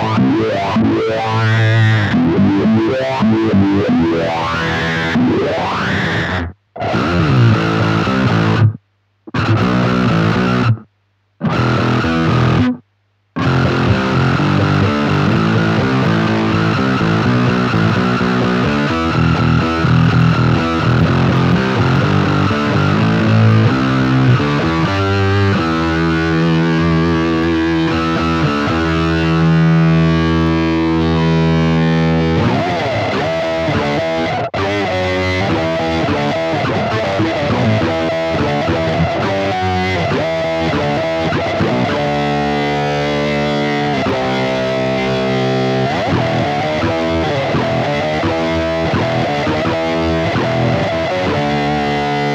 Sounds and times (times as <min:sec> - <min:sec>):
Distortion: 0:00.0 - 0:52.3
Effects unit: 0:00.0 - 0:52.3
Guitar: 0:00.0 - 0:52.3.